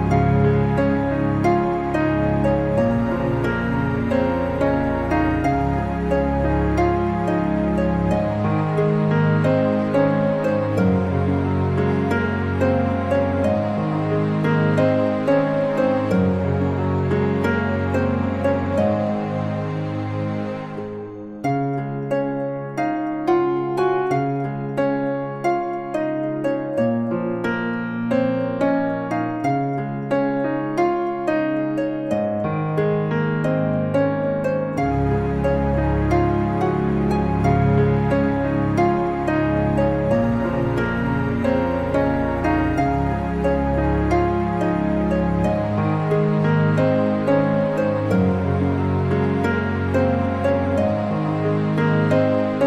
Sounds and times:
Music: 0:00.0 - 0:52.6.

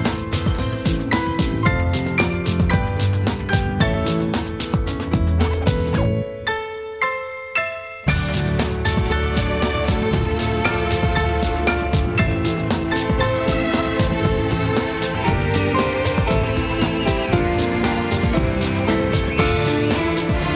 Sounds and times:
Dance music: 0:00.0 - 0:06.5, 0:08.1 - 0:20.5.

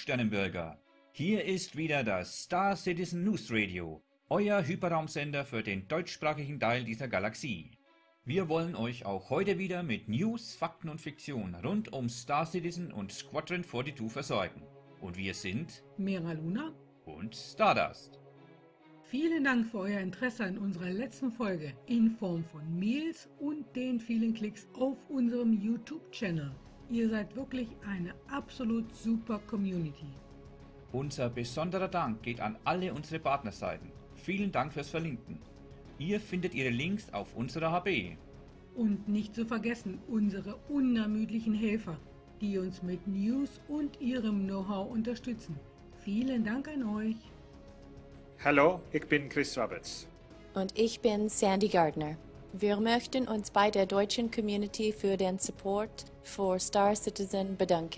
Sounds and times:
Speech: 0:00.0 - 0:18.1, 0:19.2 - 0:30.1, 0:31.0 - 0:35.4, 0:36.0 - 0:38.2, 0:38.8 - 0:47.2, 0:48.4 - 0:50.0, 0:50.6 - 0:57.9.

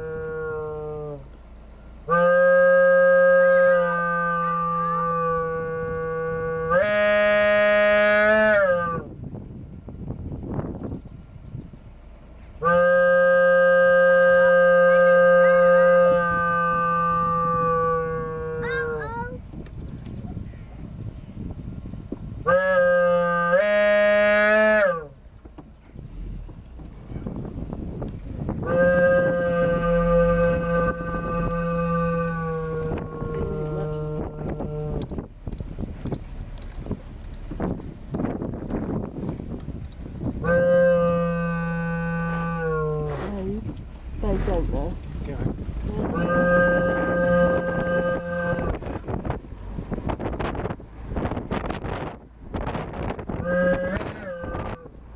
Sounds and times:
Outside, rural or natural: 0:00.0 - 0:55.1.

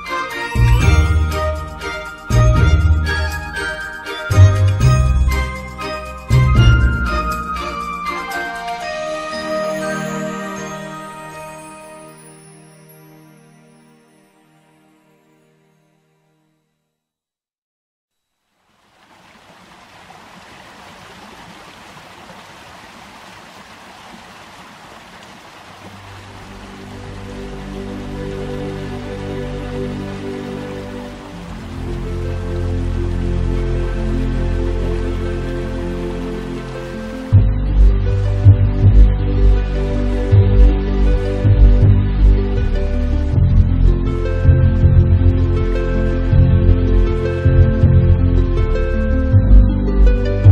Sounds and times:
Music: 0:00.0 - 0:17.3, 0:26.4 - 0:50.5.

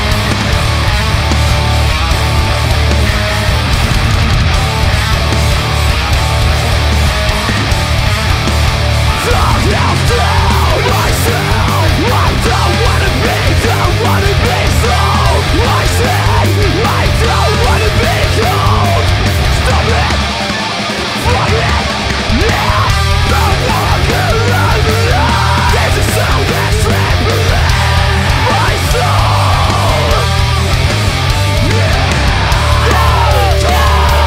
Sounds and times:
Funk: 0:00.0 - 0:34.2.

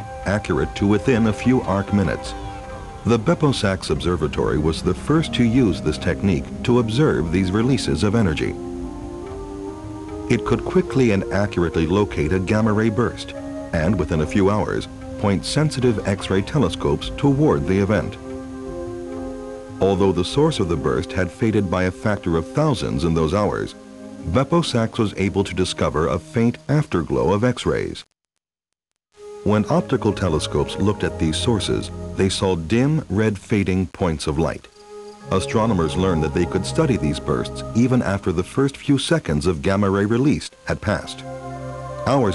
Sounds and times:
Music: 0:00.0 - 0:28.1, 0:29.2 - 0:42.3.

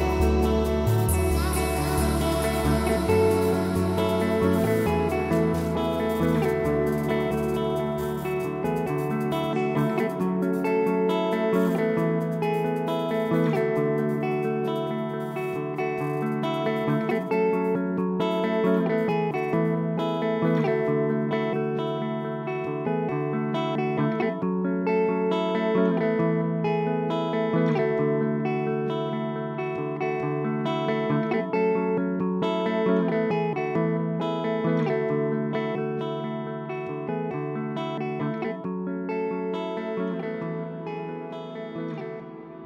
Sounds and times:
Music: 0:00.0 - 0:42.6.

